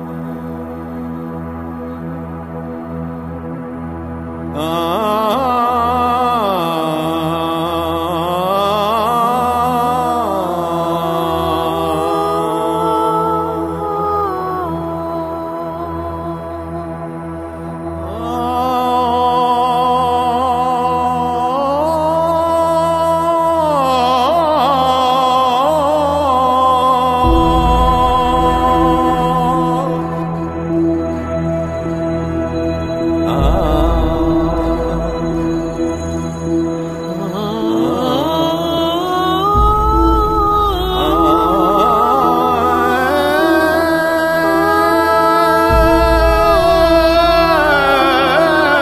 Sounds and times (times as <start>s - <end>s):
Ambient music: 0.0s - 48.8s.